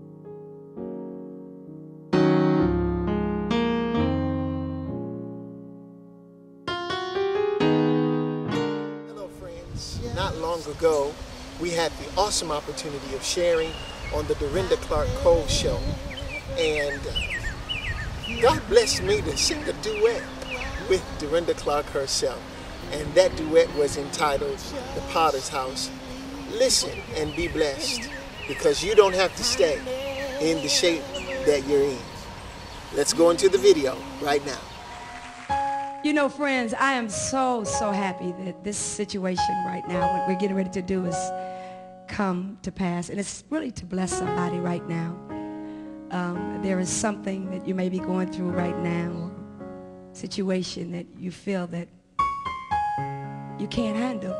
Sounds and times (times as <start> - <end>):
Music: 0.0 - 13.5, 14.2 - 54.3
Speech: 9.2 - 15.9, 16.6 - 17.2, 18.3 - 32.1, 33.0 - 34.6, 46.1 - 49.3, 53.6 - 54.3
Male singing: 14.6 - 16.8, 18.4 - 21.5, 23.0 - 32.2, 33.1 - 34.5.